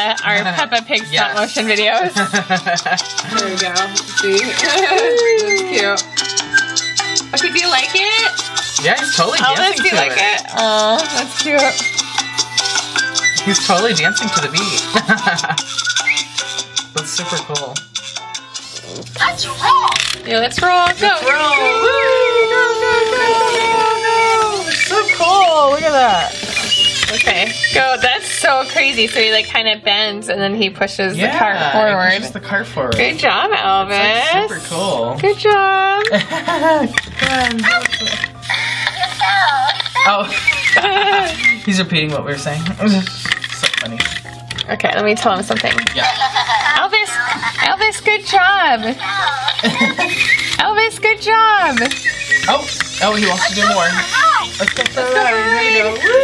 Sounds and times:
Music: 0:00.0 - 0:56.2.

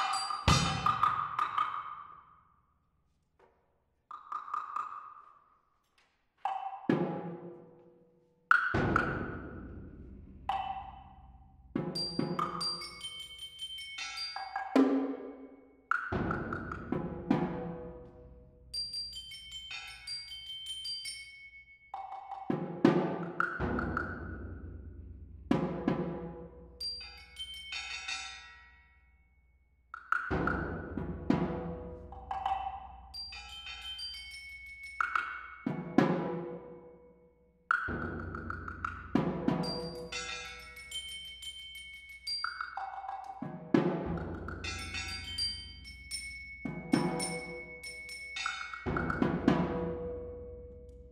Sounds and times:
Drum: 0:00.0 - 0:01.8, 0:30.3 - 0:32.8, 0:37.9 - 0:40.3, 0:48.8 - 0:50.4.

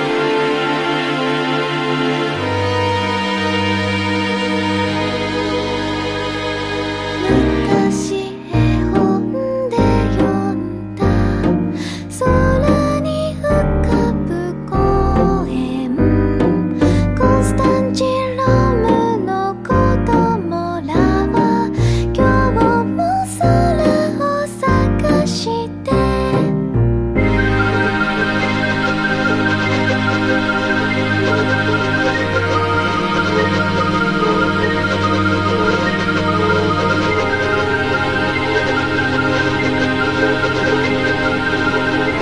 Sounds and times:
Music: 0:00.0 - 0:42.2.

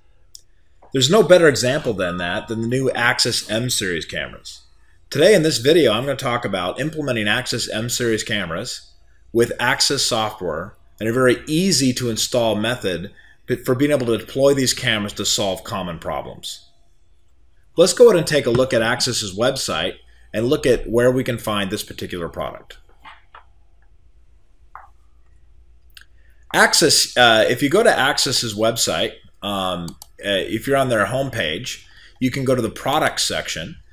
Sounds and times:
Speech: 0:00.8 - 0:16.6, 0:17.8 - 0:23.4, 0:26.5 - 0:33.8.

